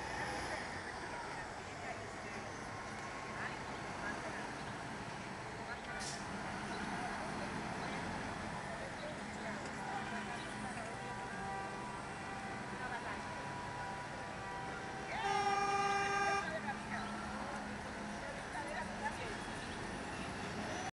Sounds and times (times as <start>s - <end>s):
Bus: 0.0s - 20.9s
Speech: 0.4s - 4.7s, 5.5s - 11.4s, 12.6s - 13.4s, 16.1s - 19.8s.